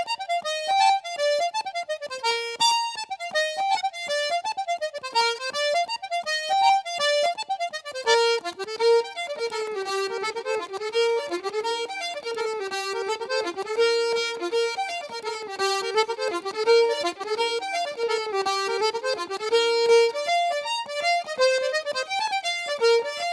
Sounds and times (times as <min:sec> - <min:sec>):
Accordion: 0:00.0 - 0:23.3.